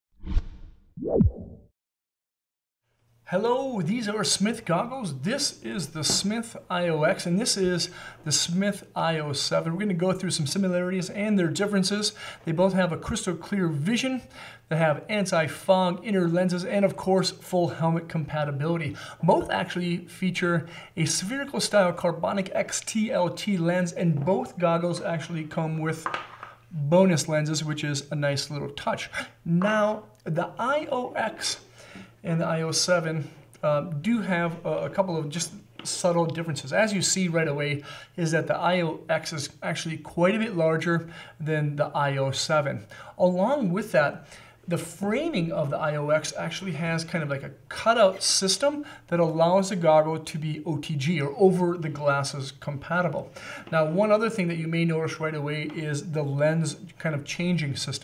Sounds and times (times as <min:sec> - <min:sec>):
Whoosh, swoosh, swish: 0:00.2 - 0:01.7.